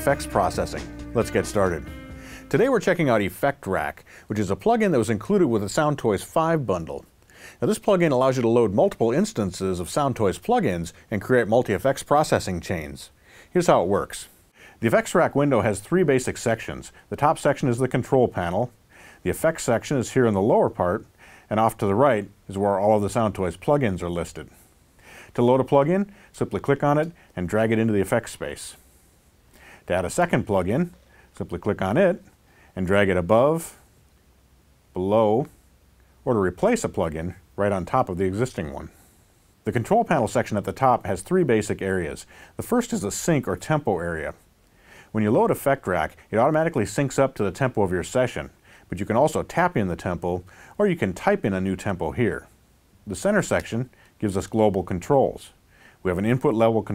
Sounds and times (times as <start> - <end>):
Speech: 0.0 - 1.9, 2.5 - 24.6, 25.3 - 28.8, 29.9 - 33.8, 34.9 - 35.5, 36.2 - 39.0, 39.6 - 44.4, 45.1 - 56.9.